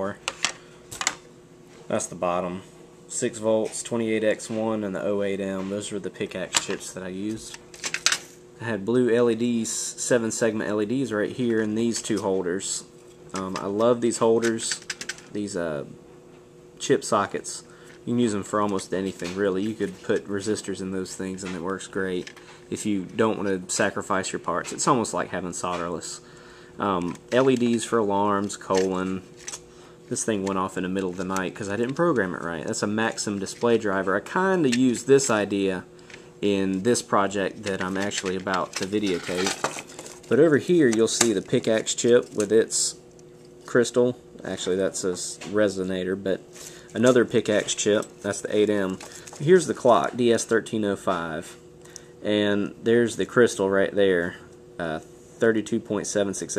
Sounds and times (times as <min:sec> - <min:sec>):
Speech: 0:00.0 - 0:00.2, 0:01.9 - 0:07.6, 0:08.6 - 0:16.0, 0:16.8 - 0:29.3, 0:30.1 - 0:39.6, 0:40.3 - 0:43.0, 0:43.7 - 0:51.6, 0:52.2 - 0:56.5.